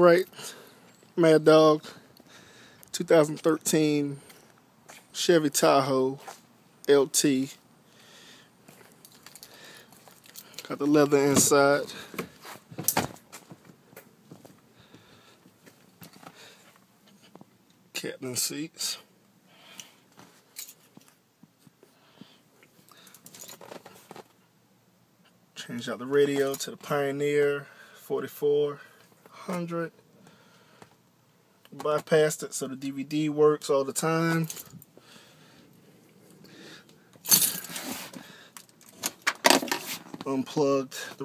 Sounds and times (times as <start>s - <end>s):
Speech: 1.2s - 2.0s, 5.2s - 6.2s, 6.9s - 7.6s, 18.0s - 19.1s, 25.6s - 30.0s, 31.8s - 34.5s, 40.2s - 41.2s.